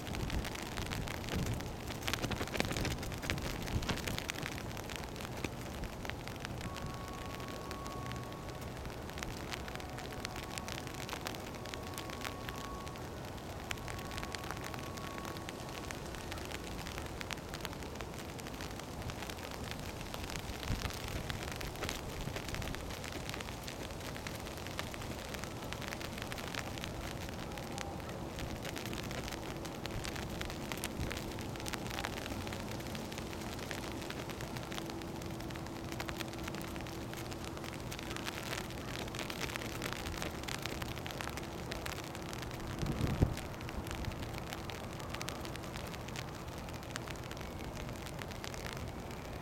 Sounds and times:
Rain on surface: 0.0 - 49.4.

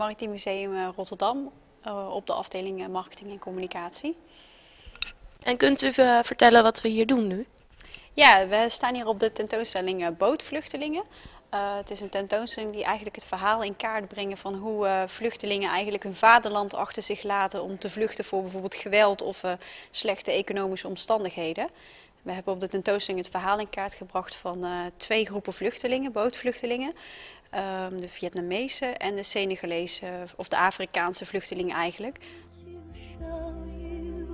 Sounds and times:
Speech: 0.0 - 4.2, 5.4 - 7.5, 8.2 - 21.7, 22.3 - 27.0, 27.6 - 32.2.

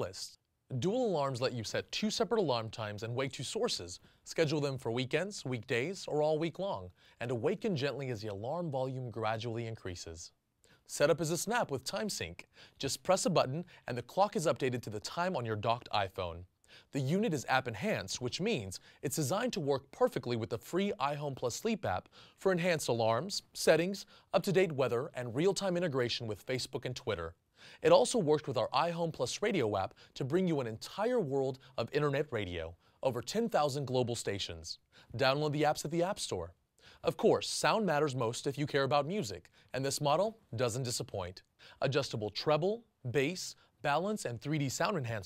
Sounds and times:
Speech: 0.0 - 45.2.

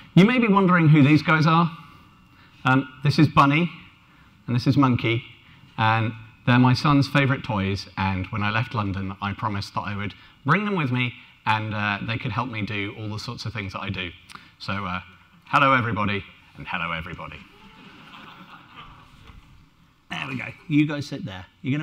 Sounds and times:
Speech: 0.2 - 1.8, 2.6 - 3.8, 4.5 - 17.6, 20.1 - 21.8.

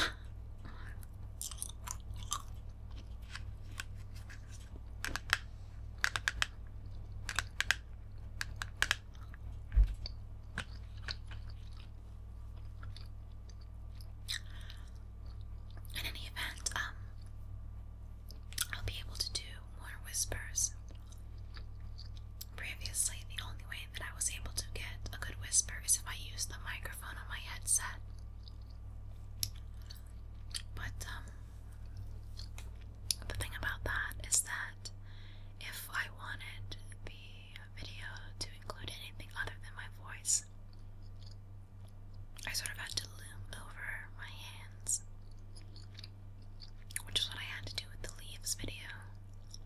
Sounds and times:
Chewing, mastication: 0.6 - 5.3, 6.0 - 17.6, 18.2 - 19.6, 20.8 - 23.5, 27.8 - 33.7, 40.1 - 43.2, 45.0 - 49.6.

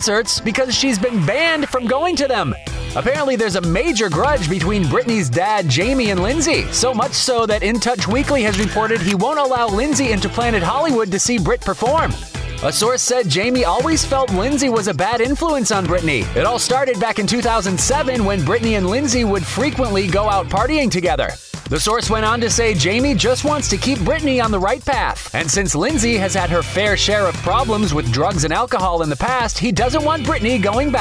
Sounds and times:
Music: 0.0 - 31.0
Speech: 0.0 - 31.0.

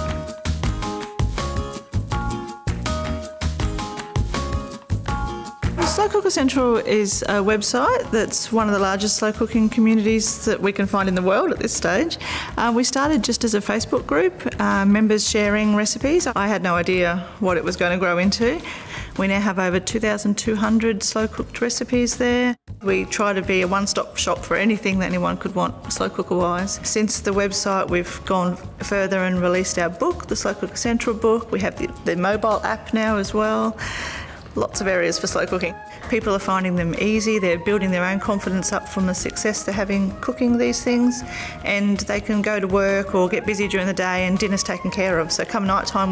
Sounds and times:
Music: 0.0 - 46.1
Speech: 5.8 - 18.6, 19.2 - 33.8, 34.6 - 46.1.

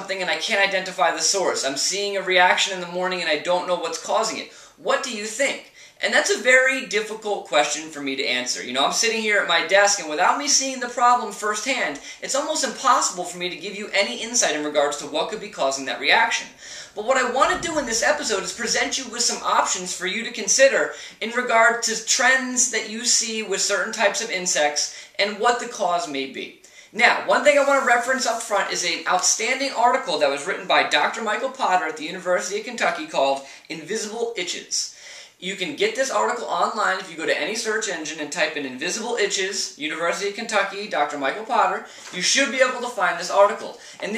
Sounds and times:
Speech: 0.0 - 44.1.

